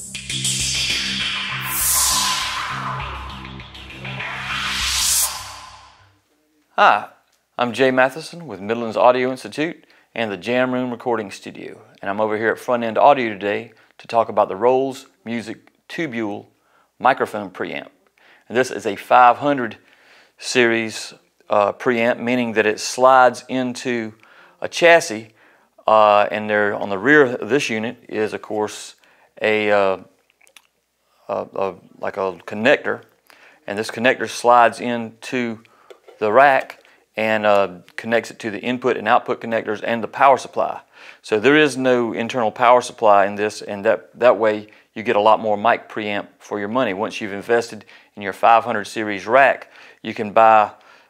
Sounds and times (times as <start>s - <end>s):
Speech: 6.2s - 19.8s, 20.4s - 30.1s, 31.2s - 33.1s, 33.7s - 50.8s.